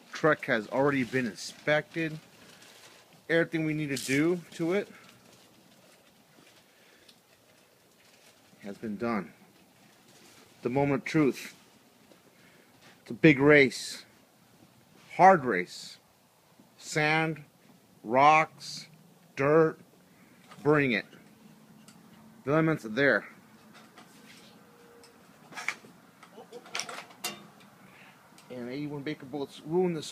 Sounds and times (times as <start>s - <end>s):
Speech: 0.1s - 2.2s, 3.3s - 5.0s, 8.6s - 9.4s, 10.6s - 11.6s, 13.1s - 14.1s, 15.1s - 16.0s, 16.8s - 17.5s, 18.1s - 19.8s, 20.6s - 21.2s, 22.4s - 23.4s, 28.5s - 30.1s.